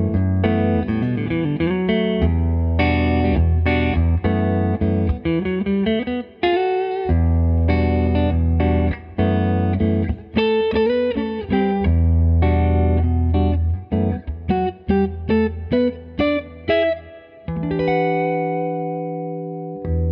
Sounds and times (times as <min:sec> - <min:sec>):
Music: 0:00.0 - 0:20.1.